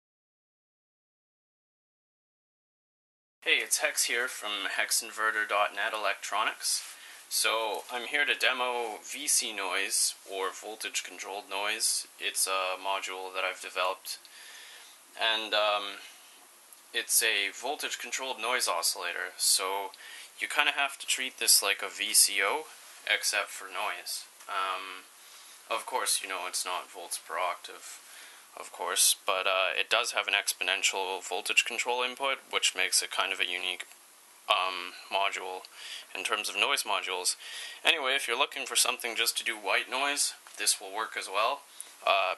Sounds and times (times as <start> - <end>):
Speech: 3.4 - 14.3, 15.2 - 16.1, 16.9 - 25.1, 25.7 - 28.0, 28.6 - 33.9, 34.5 - 42.3.